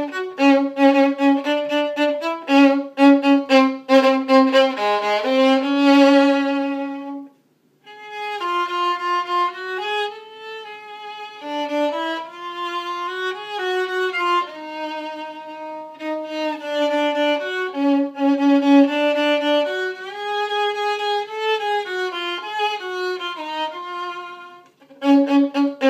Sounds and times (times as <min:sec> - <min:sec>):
Violin, fiddle: 0:00.0 - 0:25.8.